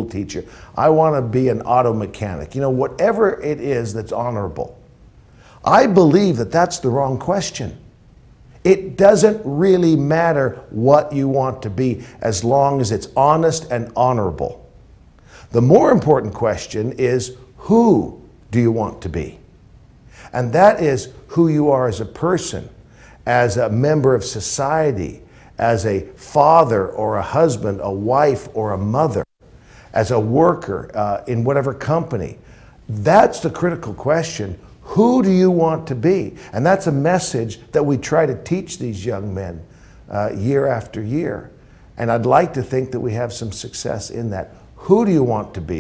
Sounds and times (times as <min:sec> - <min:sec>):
Speech: 0:00.0 - 0:04.8, 0:05.6 - 0:07.8, 0:08.6 - 0:14.6, 0:15.5 - 0:19.4, 0:20.3 - 0:29.3, 0:30.0 - 0:45.8
Inside, small room: 0:00.0 - 0:45.8.